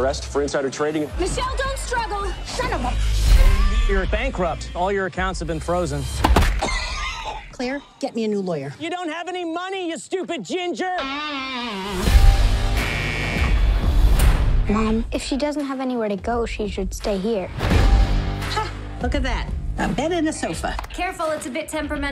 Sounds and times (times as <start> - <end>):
Music: 0.0 - 6.7, 11.8 - 22.1.